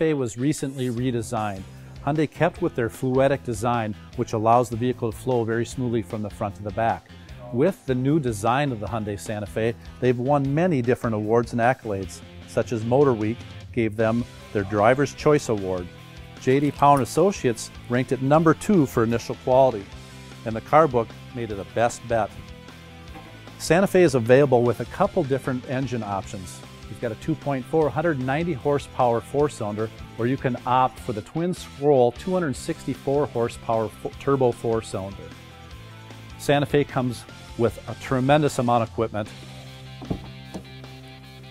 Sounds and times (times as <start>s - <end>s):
Speech: 0.0s - 22.4s, 23.6s - 35.3s, 36.4s - 39.4s
Music: 0.0s - 41.5s.